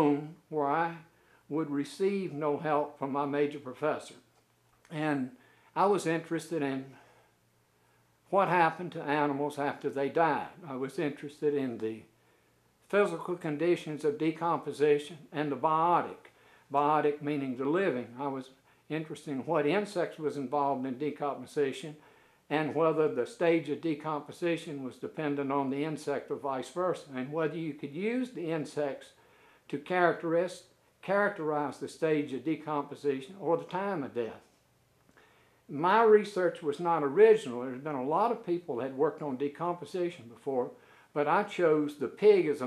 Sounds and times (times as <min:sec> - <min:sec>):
Speech: 0:00.0 - 0:04.3, 0:04.9 - 0:07.0, 0:08.3 - 0:12.1, 0:12.9 - 0:34.5, 0:35.7 - 0:42.6.